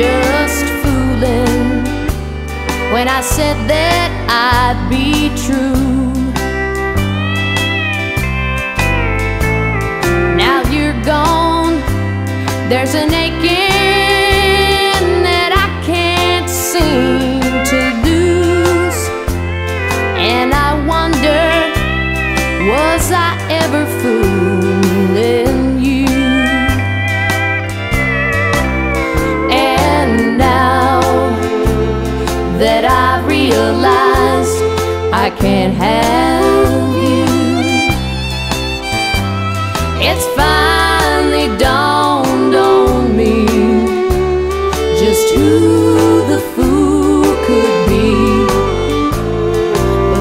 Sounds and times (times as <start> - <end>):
Rhythm and blues: 0.0 - 50.2.